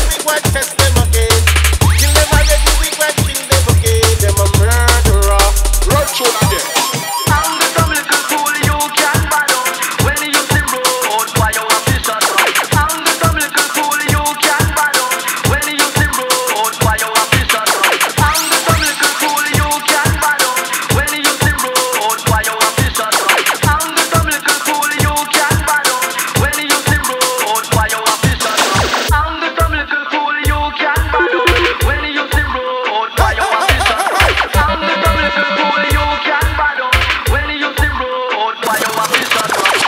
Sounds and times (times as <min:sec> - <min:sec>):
Drum and bass: 0:00.0 - 0:29.2, 0:31.0 - 0:32.6, 0:33.3 - 0:37.3.